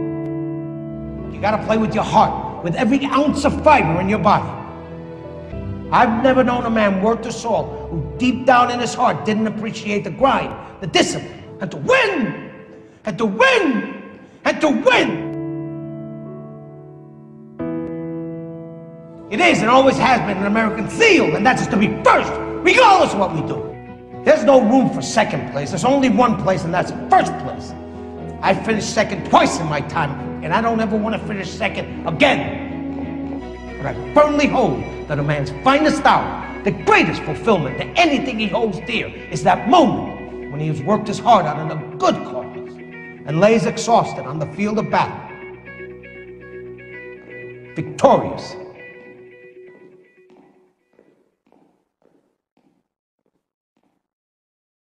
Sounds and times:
Music: 0.0s - 50.9s
Speech: 1.3s - 4.6s, 5.9s - 12.4s, 13.1s - 15.3s, 19.3s - 23.6s, 24.2s - 27.7s, 28.4s - 32.6s, 33.8s - 42.6s, 43.3s - 45.2s, 47.8s - 48.6s.

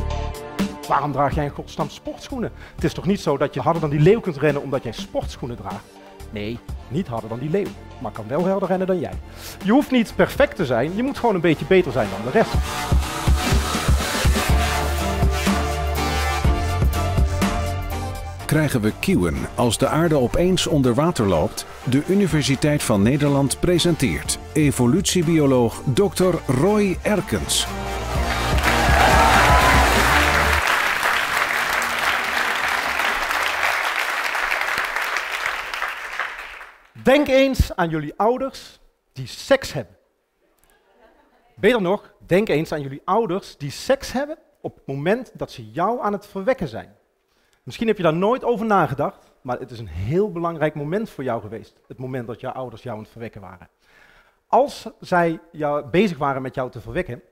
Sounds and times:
Music: 0.0s - 37.2s
Speech: 0.8s - 12.6s, 18.4s - 27.7s, 37.0s - 40.0s, 41.5s - 47.0s, 47.7s - 53.7s, 54.5s - 57.3s.

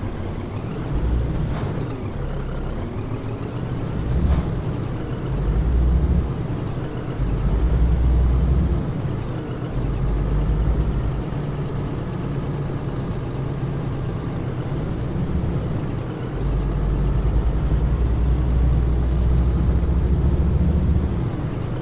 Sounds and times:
Vehicle: 0.0s - 21.8s.

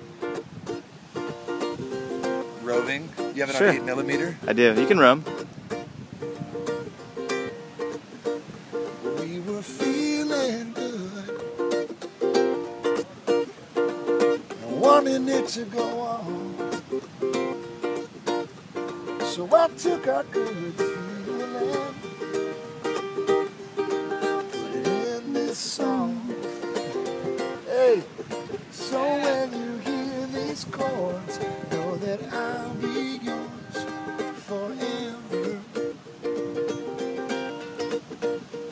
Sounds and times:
Music: 0.0s - 38.7s.

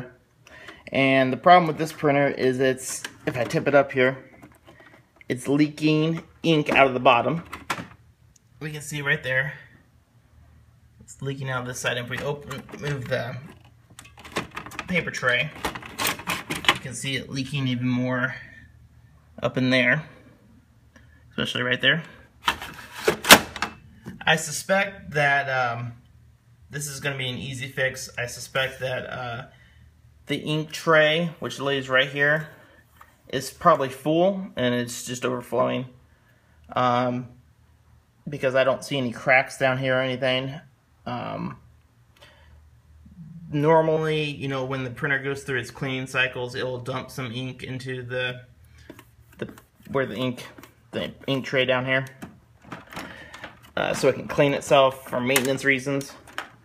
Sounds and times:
Speech: 0.0s - 0.2s, 0.9s - 4.3s, 5.3s - 7.5s, 8.6s - 9.8s, 11.0s - 13.6s, 14.8s - 15.6s, 16.7s - 18.7s, 19.4s - 20.2s, 21.4s - 22.3s, 24.2s - 26.0s, 26.7s - 29.6s, 30.3s - 32.6s, 33.3s - 36.0s, 36.7s - 37.4s, 38.2s - 41.7s, 43.2s - 48.5s, 49.4s - 52.2s, 53.8s - 56.3s.

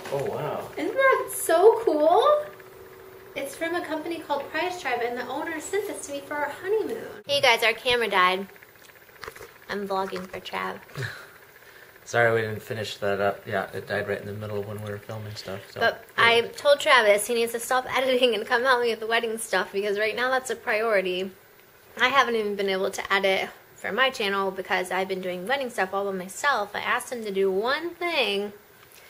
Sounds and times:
Inside, small room: 0.0s - 29.0s.

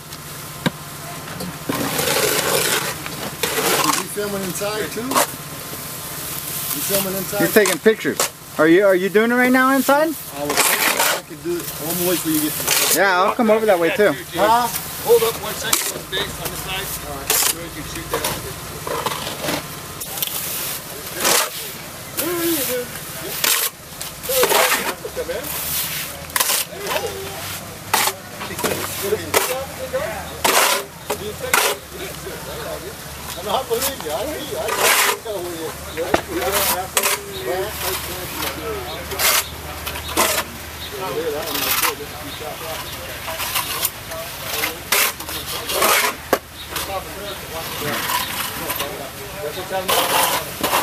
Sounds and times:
Scratch: 1.7s - 5.4s, 10.2s - 13.0s, 14.7s - 29.7s, 30.4s - 31.9s, 33.4s - 40.6s, 41.2s - 49.1s, 49.7s - 50.8s
Speech: 6.8s - 18.9s, 20.0s - 50.8s.

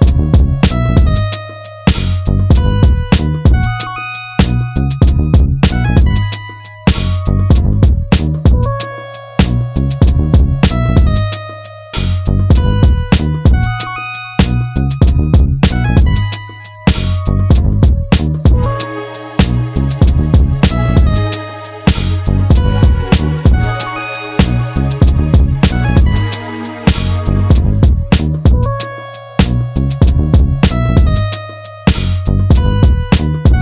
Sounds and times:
Music: 0.0s - 33.6s.

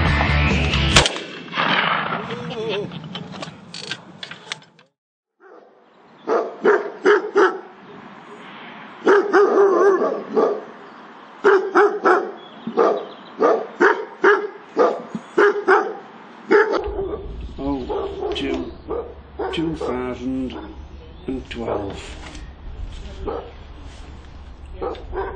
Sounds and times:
Bird: 12.2s - 13.6s.

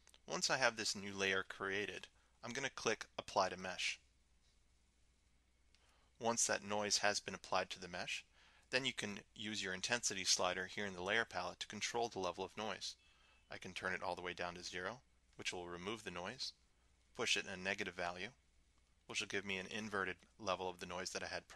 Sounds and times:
Speech: 0.3s - 4.0s, 6.2s - 16.6s, 17.2s - 18.4s, 19.1s - 21.5s.

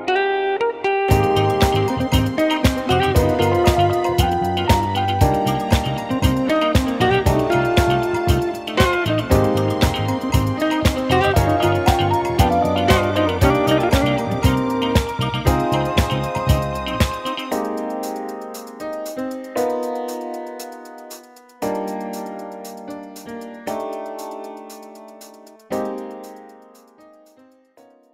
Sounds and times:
Music: 0.0s - 28.1s.

